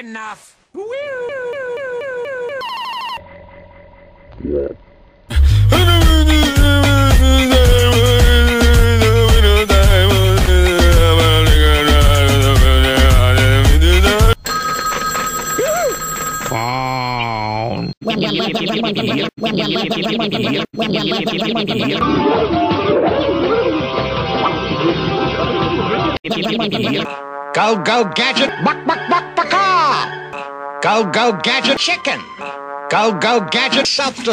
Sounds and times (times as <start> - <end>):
Music: 5.3 - 14.4, 22.0 - 26.2, 27.1 - 34.0.